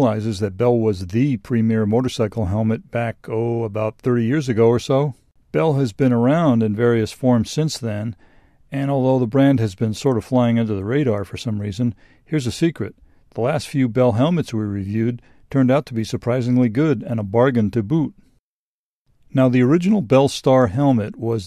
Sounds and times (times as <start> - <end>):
Speech: 0.0 - 18.2, 19.3 - 21.4.